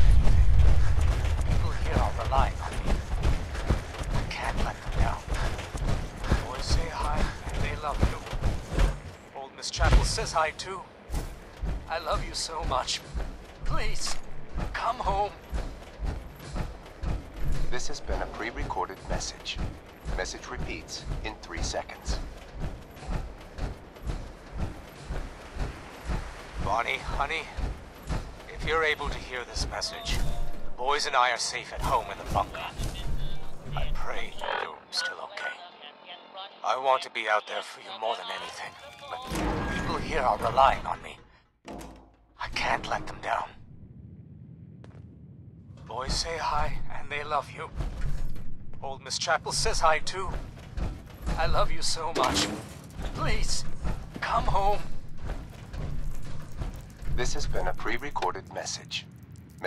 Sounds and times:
Speech: 1.5 - 3.0, 4.3 - 5.5, 6.3 - 8.2, 9.4 - 10.9, 11.9 - 13.0, 13.6 - 15.4, 17.7 - 19.6, 20.2 - 22.2, 26.6 - 27.6, 28.5 - 41.2, 42.4 - 43.6, 45.9 - 47.7, 48.8 - 50.3, 51.4 - 52.5, 53.1 - 54.9, 57.2 - 59.0.

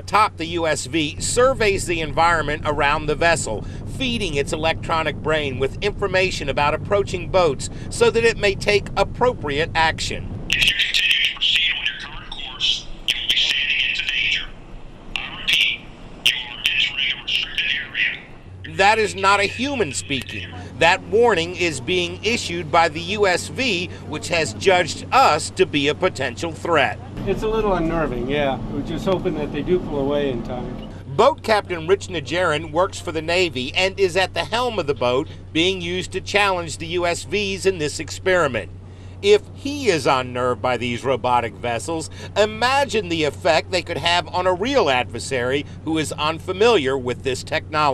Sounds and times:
Motorboat, speedboat: 0.0 - 11.8, 16.7 - 47.9
Speech: 0.0 - 14.5, 15.2 - 47.9.

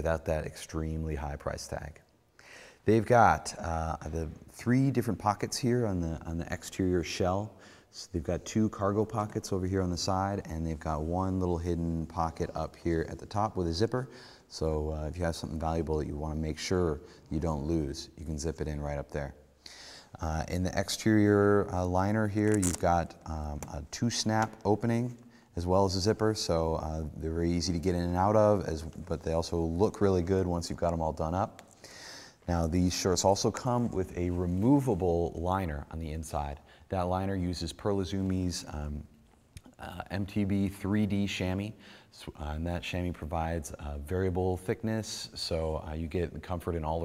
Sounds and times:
Speech: 0.0 - 2.1, 2.8 - 19.4, 20.1 - 31.6, 32.4 - 47.0.

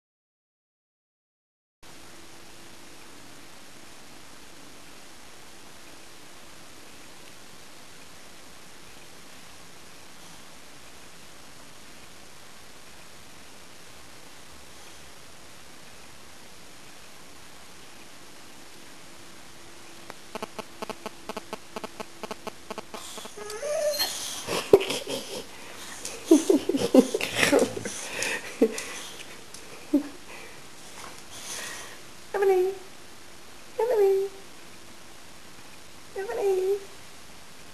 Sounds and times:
Speech: 32.3 - 32.9, 33.8 - 34.4, 36.1 - 37.0.

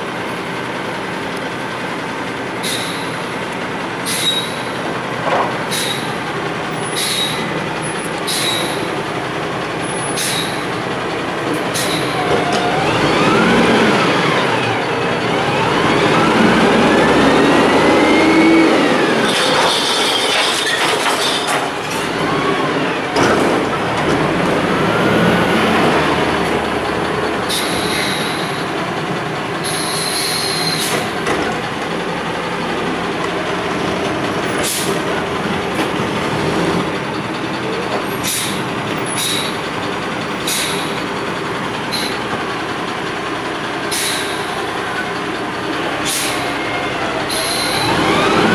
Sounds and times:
Truck: 0.0 - 48.5.

